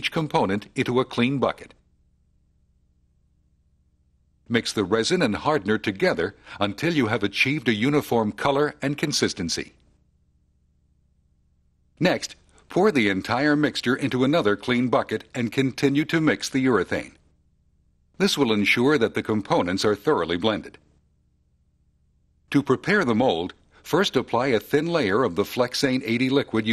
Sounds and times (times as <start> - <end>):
Speech: 0.0 - 1.8, 4.5 - 9.8, 12.0 - 17.2, 18.2 - 20.8, 22.5 - 26.7.